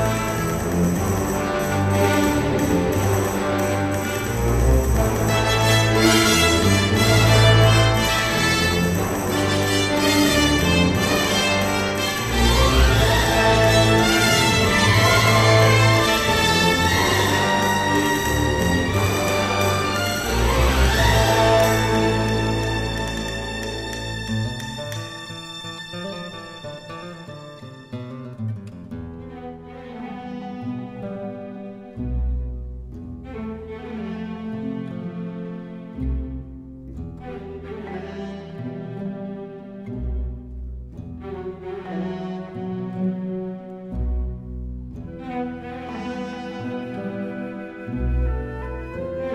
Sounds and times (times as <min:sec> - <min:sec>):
Music: 0:00.0 - 0:49.3.